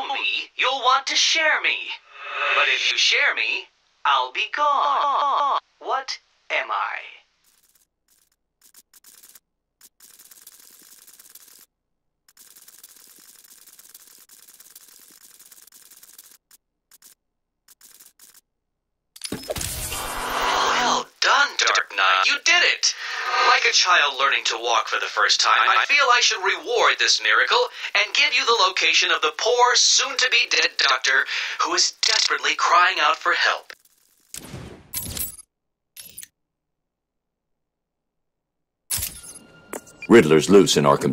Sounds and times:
Gears: 7.4s - 11.7s, 12.3s - 18.5s, 33.7s - 34.4s
Ratchet, pawl: 7.4s - 11.7s, 12.3s - 18.5s, 33.8s - 34.3s.

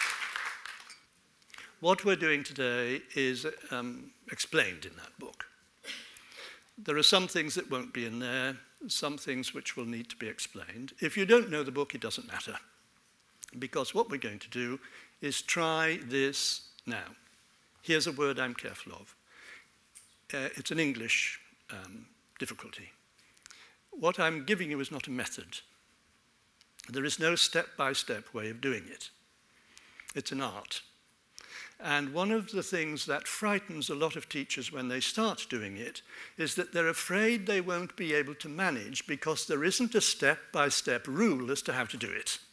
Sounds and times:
Speech: 1.8s - 5.5s, 6.8s - 12.7s, 13.4s - 17.2s, 17.8s - 19.2s, 20.3s - 23.0s, 24.0s - 25.7s, 26.8s - 29.2s, 30.1s - 30.9s, 31.8s - 42.5s.

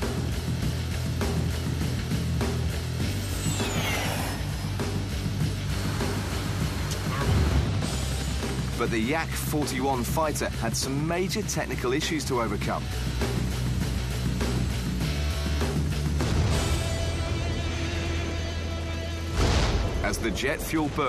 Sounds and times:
Music: 0.0s - 21.0s
Speech: 8.8s - 12.8s, 20.0s - 21.0s.

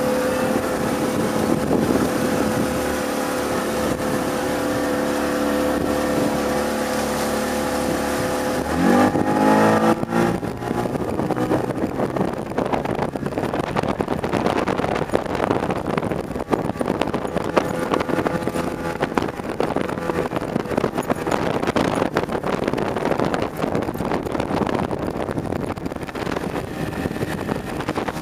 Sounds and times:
Motorboat, speedboat: 0.0s - 28.2s
Wind noise (microphone): 0.0s - 28.2s.

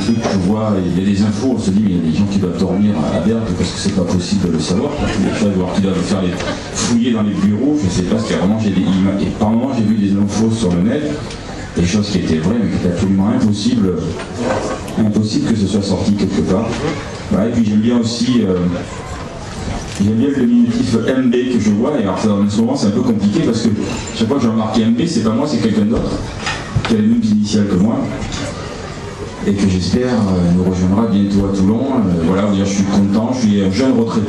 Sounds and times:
Speech: 0.0s - 19.3s, 19.9s - 28.6s, 29.3s - 34.2s.

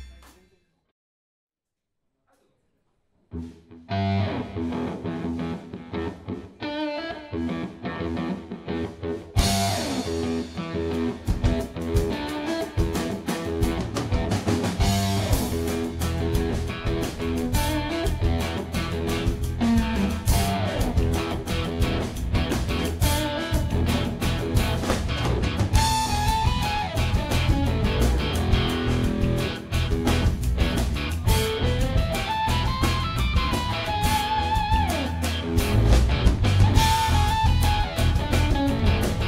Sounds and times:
Guitar: 3.3s - 39.2s.

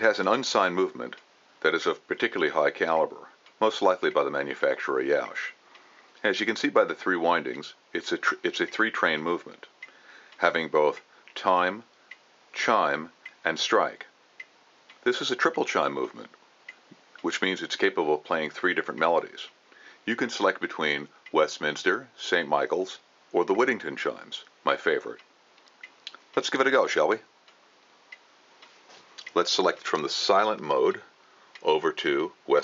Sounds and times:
Speech: 0.0s - 5.6s, 6.2s - 9.7s, 10.4s - 11.9s, 12.6s - 14.1s, 15.0s - 16.4s, 17.2s - 25.2s, 26.4s - 27.3s, 29.2s - 32.6s.

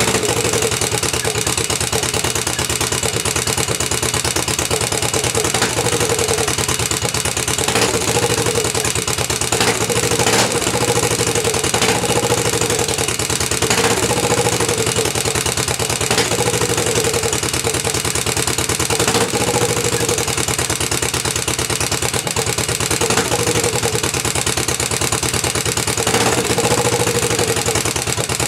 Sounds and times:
Idling: 0.0s - 28.4s.

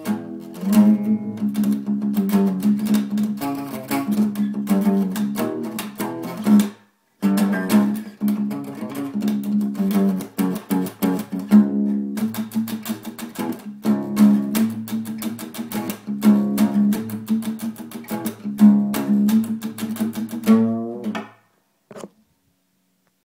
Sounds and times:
Acoustic guitar: 0.0s - 22.1s
Strum: 0.0s - 22.2s.

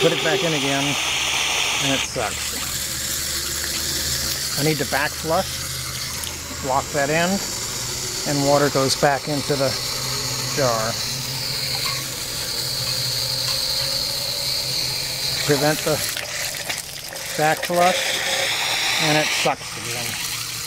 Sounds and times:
Water: 0.0s - 13.9s, 14.5s - 20.6s
Pump (liquid): 0.0s - 20.6s.

